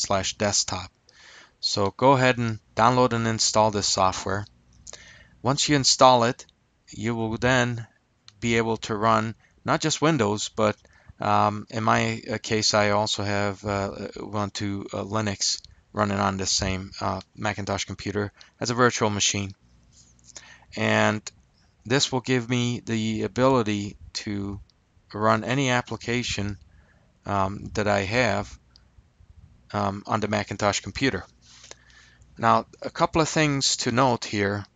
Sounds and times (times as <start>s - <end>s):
Speech: 0.0s - 0.9s, 1.6s - 4.5s, 5.4s - 19.6s, 20.7s - 21.3s, 21.9s - 26.6s, 27.3s - 28.6s, 29.7s - 31.3s, 32.4s - 34.7s.